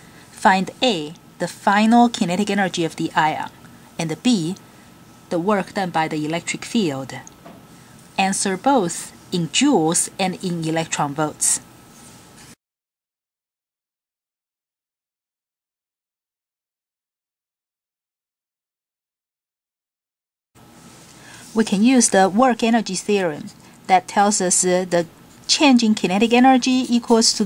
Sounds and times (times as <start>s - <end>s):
Speech: 0.4s - 4.6s, 5.3s - 7.3s, 8.2s - 11.6s, 21.5s - 27.4s.